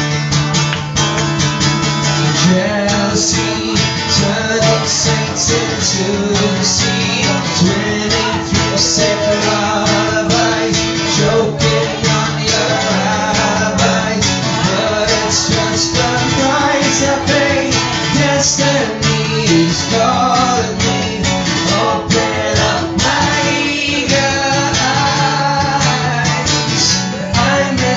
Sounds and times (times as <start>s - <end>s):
Music: 0.0s - 27.9s
Male singing: 2.2s - 27.9s.